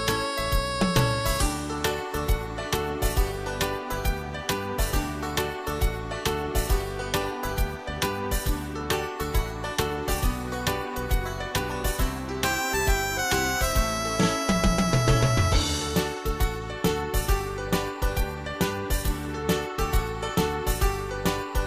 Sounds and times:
Music: 0.0 - 21.6.

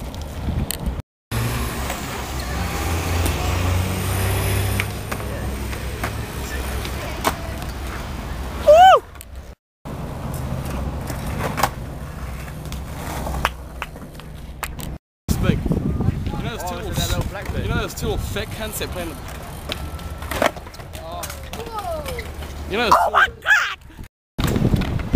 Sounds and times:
Speech: 15.3 - 19.2, 21.0 - 23.8.

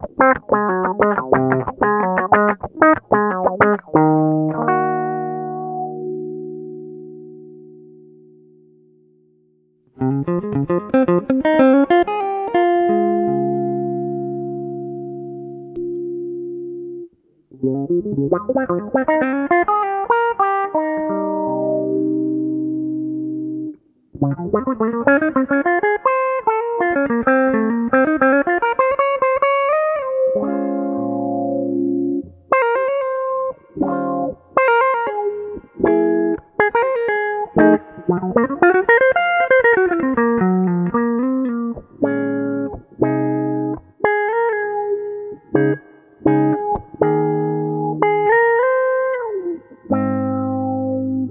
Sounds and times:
Electric guitar: 0.0 - 9.2, 9.9 - 51.3
Distortion: 0.0 - 51.3
Effects unit: 0.0 - 51.3
Electronic tuner: 0.0 - 51.3.

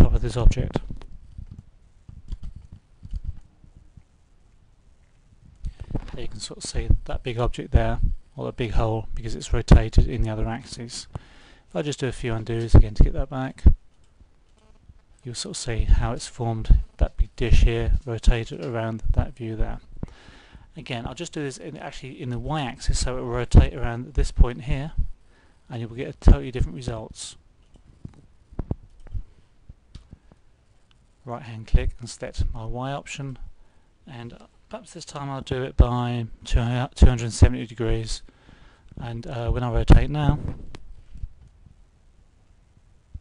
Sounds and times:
Speech: 0.0 - 0.9, 6.2 - 11.1, 11.7 - 13.8, 15.2 - 19.8, 20.7 - 25.0, 25.7 - 27.4, 31.2 - 33.5, 34.1 - 38.3, 39.0 - 40.5
Inside, small room: 0.0 - 43.2.

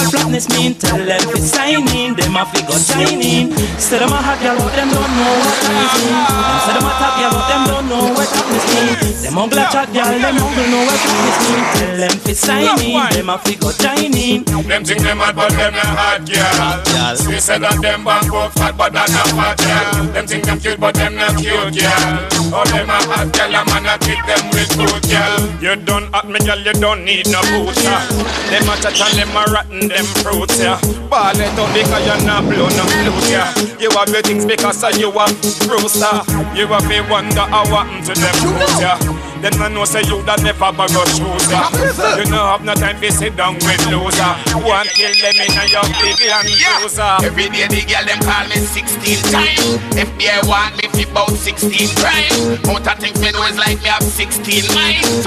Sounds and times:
Afrobeat: 0.0 - 10.8, 11.8 - 20.3, 38.3 - 39.1, 41.4 - 42.4, 44.4 - 47.0
Reggae: 0.0 - 55.2
Ska: 0.0 - 55.2.

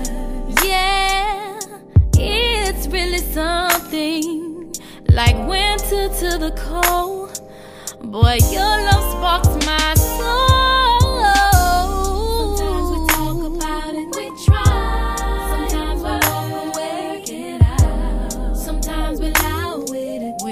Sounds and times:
Music: 0.0 - 20.5.

